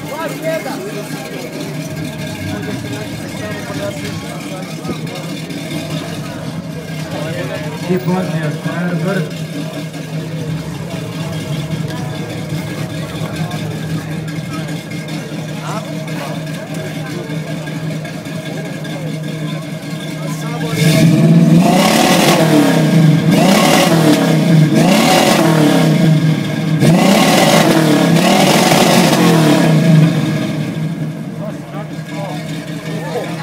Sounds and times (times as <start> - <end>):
Speech: 0.0 - 21.0, 31.3 - 33.4.